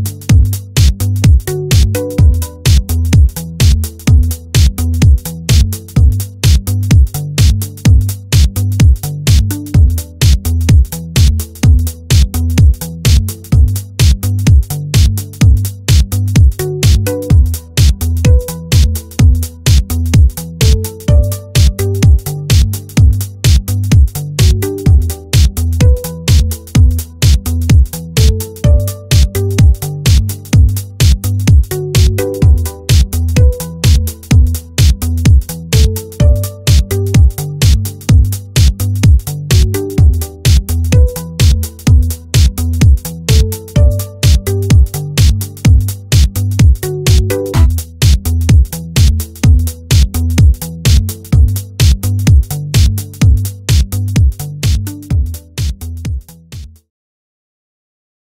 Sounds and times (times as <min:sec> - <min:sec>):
Music: 0:00.0 - 0:56.9.